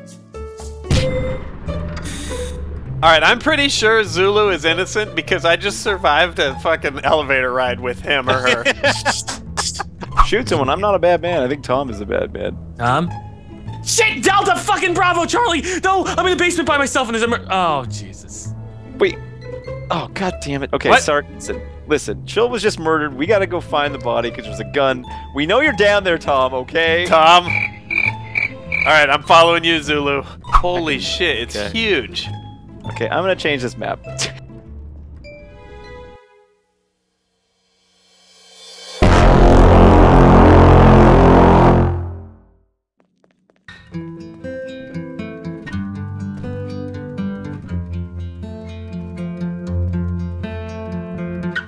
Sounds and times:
Music: 0.0 - 42.7, 43.7 - 51.6
Speech: 3.0 - 13.2, 13.8 - 19.2, 19.9 - 27.5, 28.9 - 34.1.

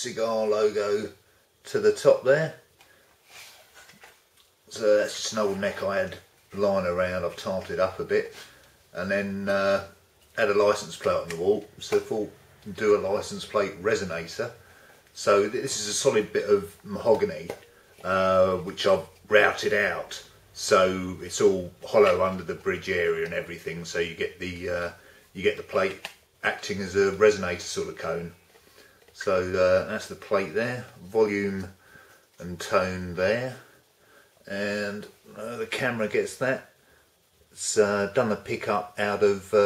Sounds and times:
Speech: 0.0 - 2.7, 4.7 - 28.4, 29.2 - 31.8, 32.4 - 33.8, 34.4 - 36.8, 37.5 - 39.6.

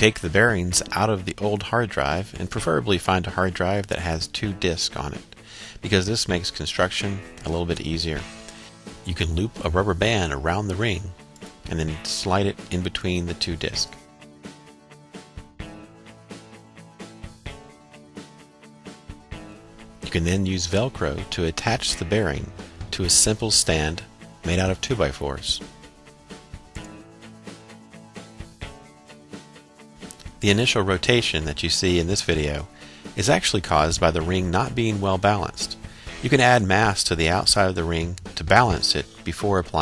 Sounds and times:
Speech: 0.0 - 8.3, 9.1 - 14.0, 20.1 - 25.7, 30.4 - 39.8
Music: 0.0 - 39.8.

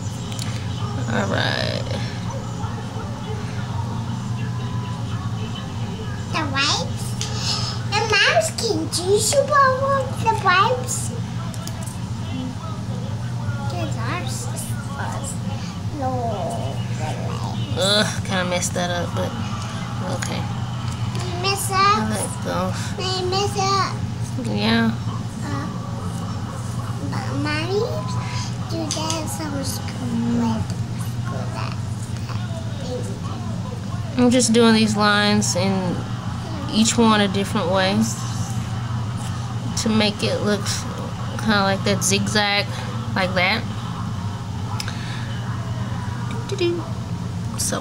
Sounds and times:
Child speech, kid speaking: 6.3 - 11.2, 13.6 - 17.9, 21.2 - 24.1, 25.4 - 25.8, 27.0 - 33.5.

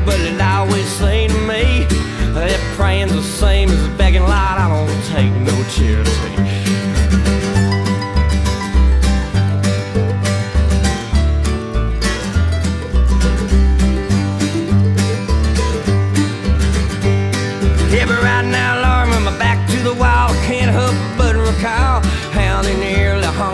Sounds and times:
Bluegrass: 0.0 - 23.5.

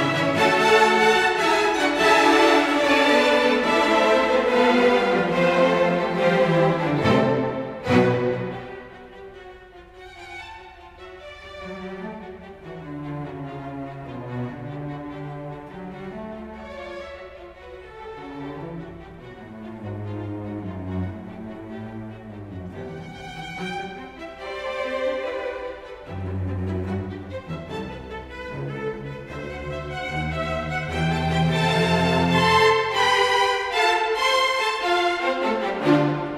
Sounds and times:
Orchestra: 0.0 - 36.3.

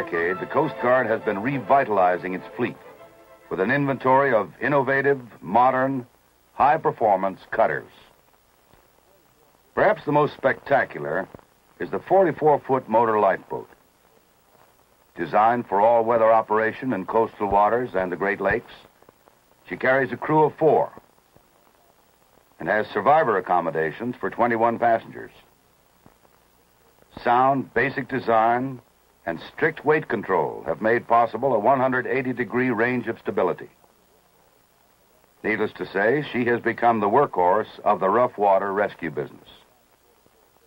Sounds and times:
Speech: 0.0 - 2.9, 3.5 - 8.2, 8.8 - 14.3, 15.2 - 18.9, 19.6 - 22.0, 22.6 - 25.5, 26.8 - 34.4, 35.4 - 40.6.

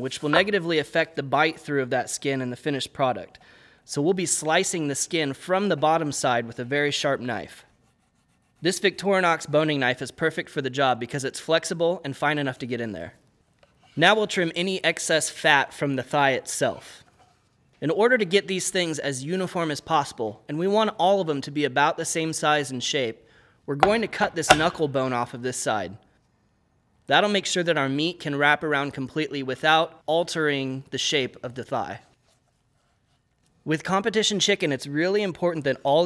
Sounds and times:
Speech: 0.0 - 7.7, 8.6 - 13.2, 14.0 - 17.0, 17.8 - 26.0, 27.1 - 32.1, 33.6 - 36.0.

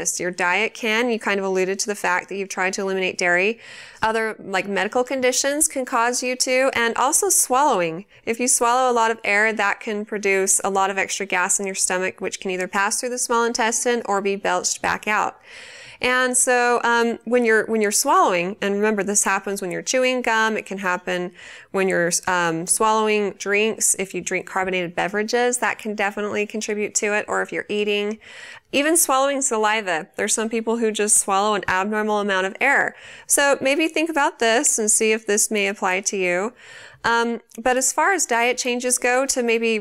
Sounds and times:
Speech: 0.0 - 15.4, 16.0 - 39.8.

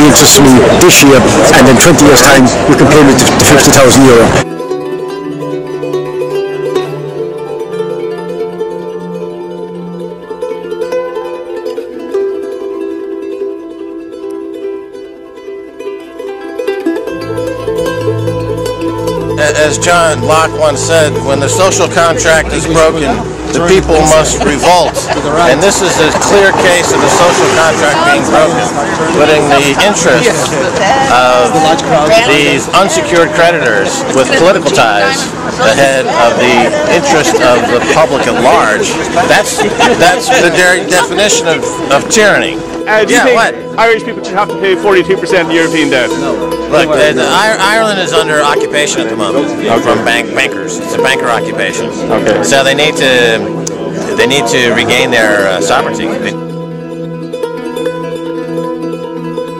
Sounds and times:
Music: 0.0 - 59.5
Speech: 19.4 - 46.2.

